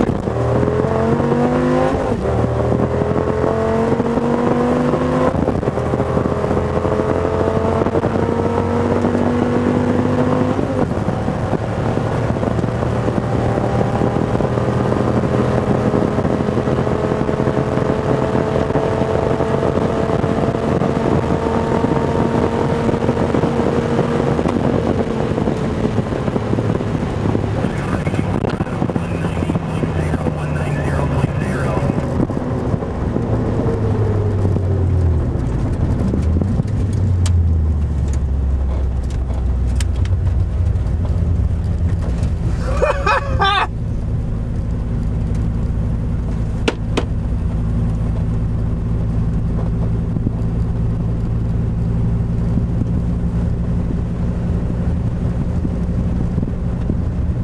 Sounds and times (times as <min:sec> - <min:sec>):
Race car, auto racing: 0:00.0 - 0:57.4.